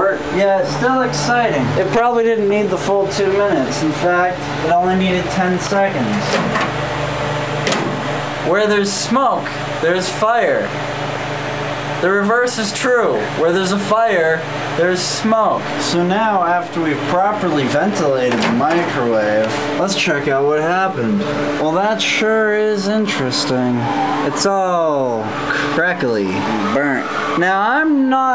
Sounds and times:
Speech: 0.0 - 6.4, 8.5 - 10.7, 12.0 - 28.3.

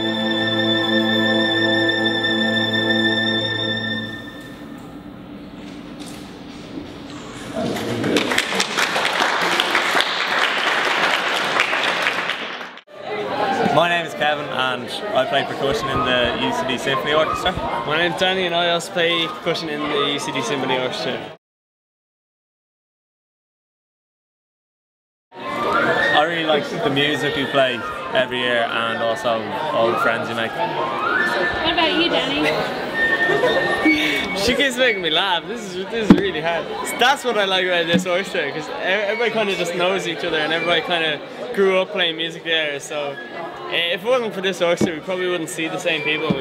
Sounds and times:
Speech: 13.6 - 21.4, 26.1 - 32.4.

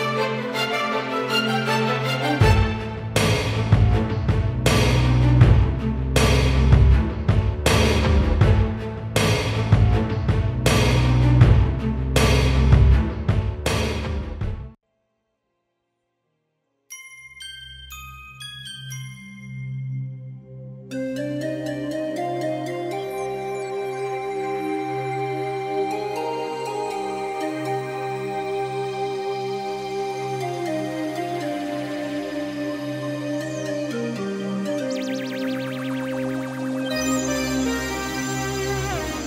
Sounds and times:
Glockenspiel: 16.9 - 29.0.

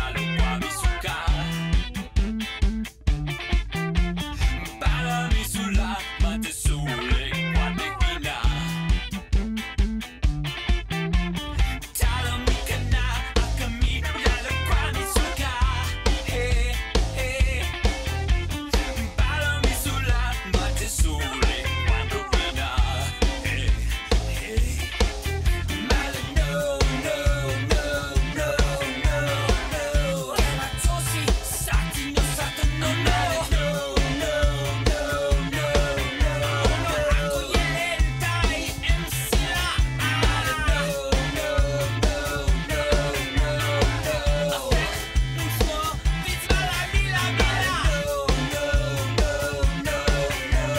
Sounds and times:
Music: 0.0 - 50.7.

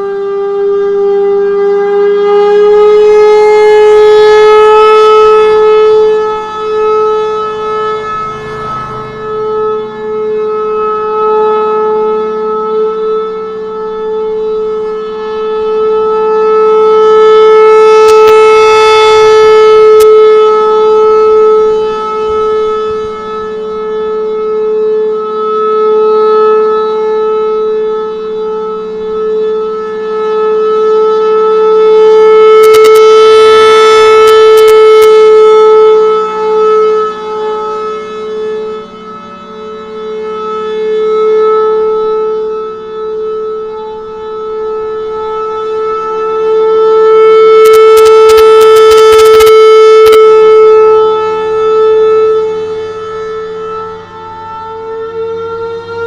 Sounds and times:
Siren: 0.0 - 56.0.

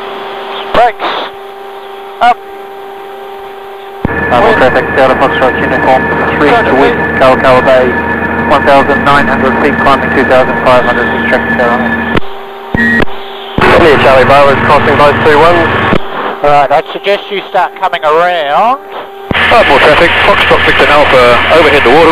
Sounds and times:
Speech: 0.6 - 1.3, 2.2 - 2.4, 4.3 - 11.9, 13.6 - 15.8, 16.4 - 22.1.

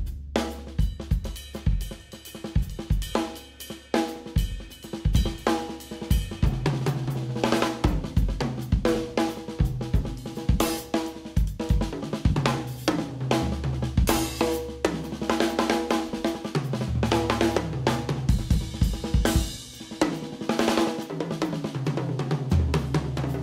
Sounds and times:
Drum: 0.0 - 23.4
Drum kit: 0.0 - 23.4.

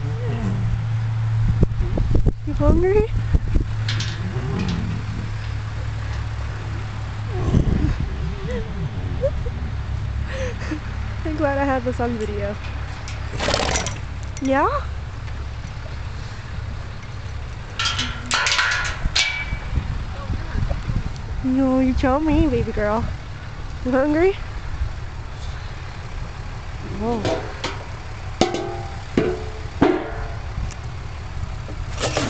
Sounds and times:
Speech: 2.5 - 3.1, 11.3 - 12.6, 21.4 - 23.1, 23.9 - 24.4, 26.8 - 27.4.

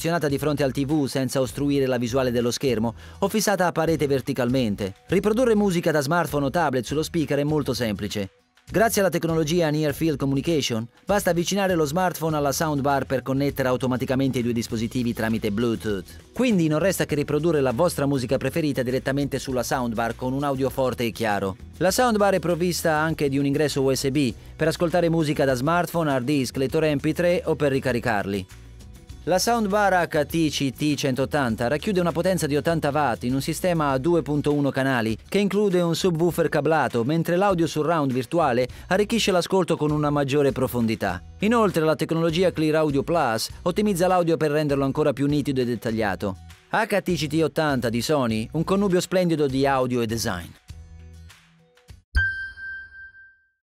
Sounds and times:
Speech: 0.0 - 28.5, 29.2 - 50.6
Music: 0.0 - 52.7.

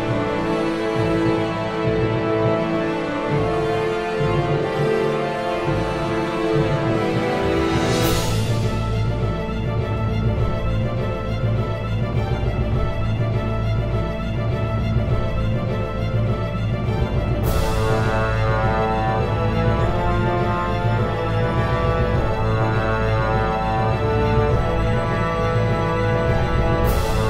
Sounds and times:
Soundtrack music: 0.0 - 27.2.

